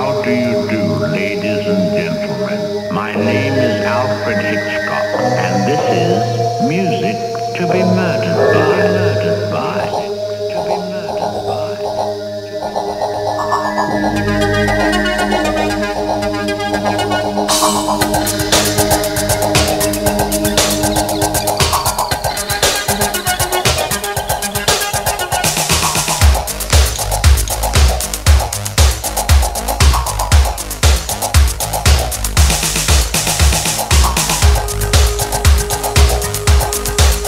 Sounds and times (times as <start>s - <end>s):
Music: 0.0s - 37.2s
Sound effect: 7.3s - 22.2s.